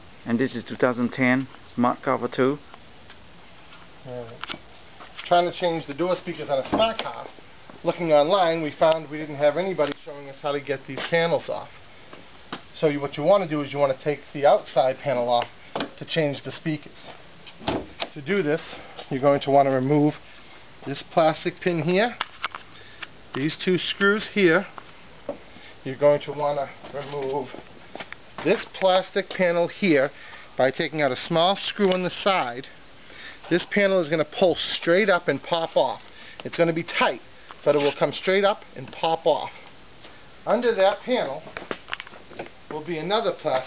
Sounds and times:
Speech: 0.2 - 2.6, 4.0 - 4.4, 5.2 - 11.7, 12.8 - 17.2, 18.1 - 20.2, 20.8 - 22.2, 23.4 - 24.7, 25.8 - 27.6, 28.4 - 32.7, 33.5 - 39.6, 40.4 - 41.5, 42.7 - 43.6.

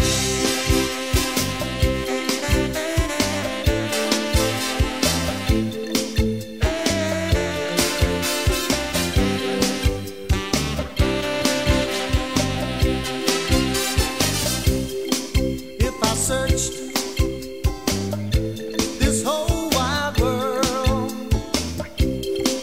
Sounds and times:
Music: 0.0 - 22.6.

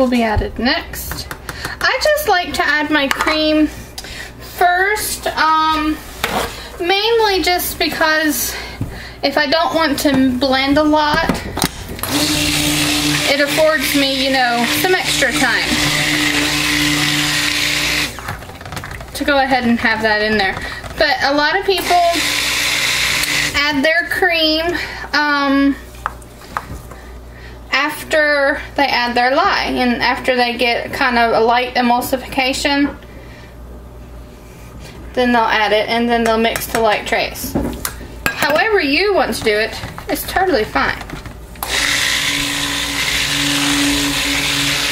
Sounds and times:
Speech: 0.0 - 3.7, 6.8 - 8.6, 9.2 - 11.3, 19.2 - 22.2, 27.7 - 33.0, 35.2 - 37.6, 38.4 - 41.1
Blender: 12.0 - 18.2, 21.7 - 23.6, 41.6 - 44.9.

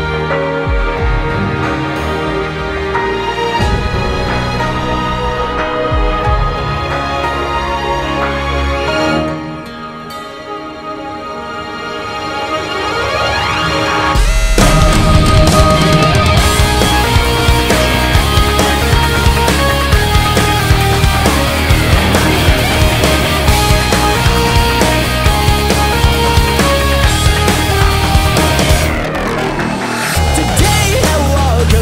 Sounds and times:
Music: 0.0 - 31.8.

